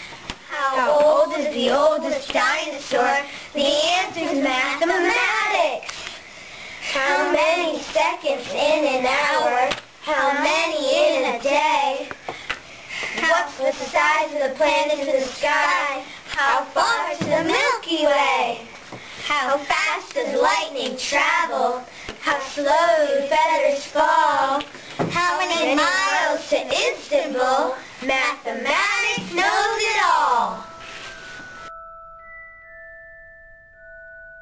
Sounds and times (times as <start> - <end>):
Inside, small room: 0.0 - 34.4.